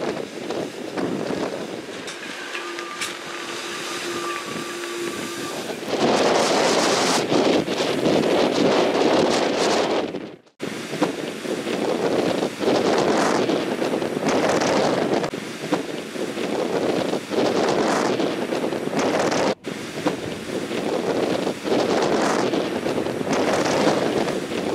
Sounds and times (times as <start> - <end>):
Wind noise (microphone): 0.0 - 24.7.